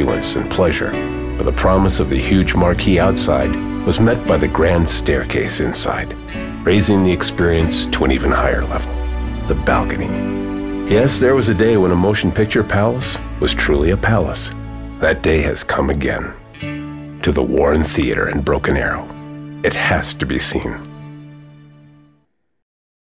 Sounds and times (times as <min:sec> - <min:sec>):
Speech: 0:00.0 - 0:10.2, 0:10.9 - 0:16.4, 0:17.2 - 0:20.9
Music: 0:00.0 - 0:22.6.